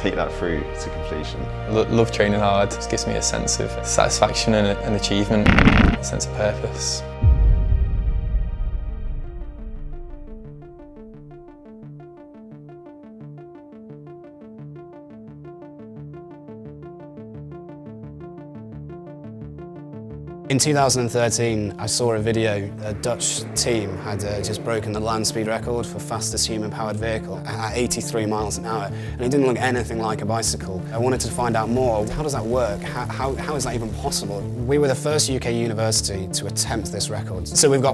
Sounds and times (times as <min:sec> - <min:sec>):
Speech: 0:00.0 - 0:05.4, 0:06.0 - 0:07.1, 0:20.5 - 0:37.9
Music: 0:00.0 - 0:37.9.